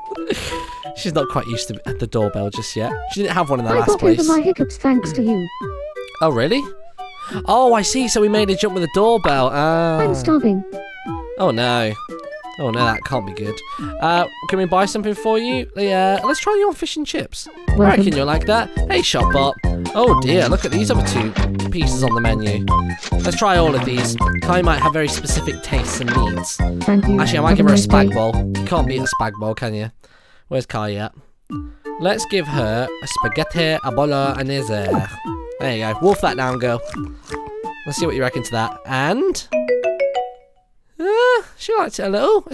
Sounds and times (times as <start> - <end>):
Music: 0.0 - 29.4, 31.5 - 40.6
Speech: 1.0 - 5.5, 6.2 - 6.7, 7.5 - 10.6, 11.4 - 12.0, 12.6 - 22.6, 23.2 - 29.9, 30.5 - 31.2, 32.0 - 36.9, 37.9 - 39.5, 41.0 - 42.5.